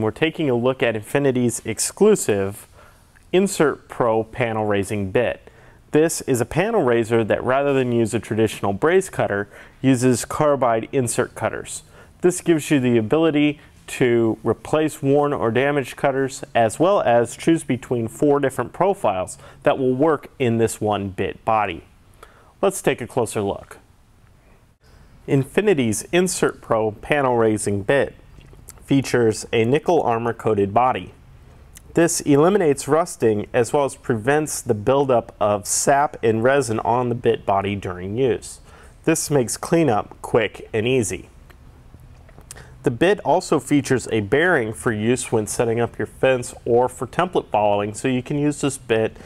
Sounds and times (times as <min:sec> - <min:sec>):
Speech: 0:00.0 - 0:21.9, 0:22.6 - 0:23.9, 0:25.3 - 0:31.2, 0:31.8 - 0:41.3, 0:42.8 - 0:49.2.